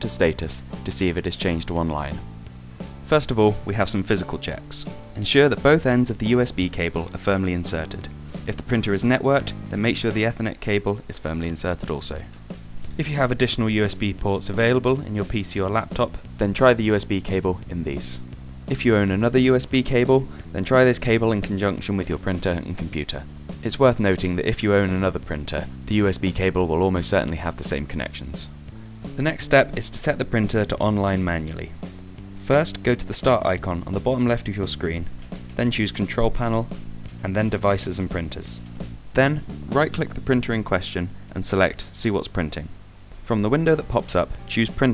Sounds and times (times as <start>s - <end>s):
Speech: 0.0s - 2.3s, 3.0s - 12.3s, 12.9s - 28.5s, 29.2s - 31.8s, 32.4s - 44.9s
Music: 0.0s - 44.9s.